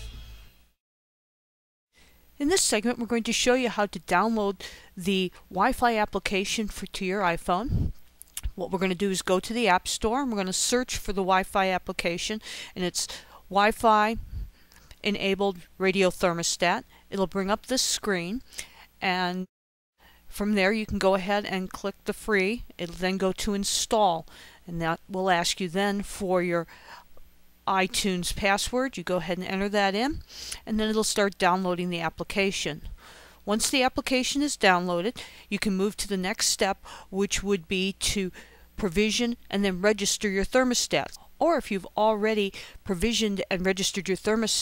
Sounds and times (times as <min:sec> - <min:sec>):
Speech: 0:02.4 - 0:07.8, 0:08.4 - 0:14.2, 0:15.0 - 0:18.4, 0:19.0 - 0:19.5, 0:20.4 - 0:26.7, 0:27.7 - 0:32.9, 0:33.5 - 0:44.6.